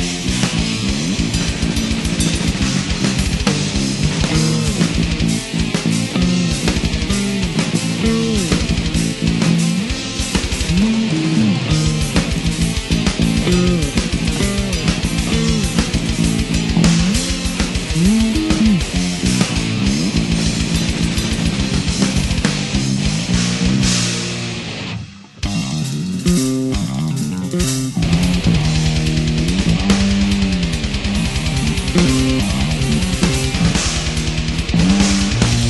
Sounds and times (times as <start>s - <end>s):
Music: 0.0s - 35.6s.